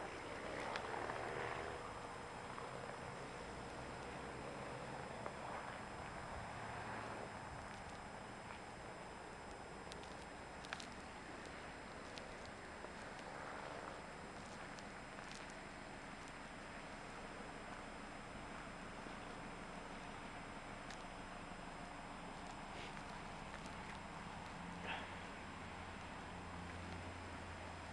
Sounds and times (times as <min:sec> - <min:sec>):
Car: 0:00.0 - 0:27.9.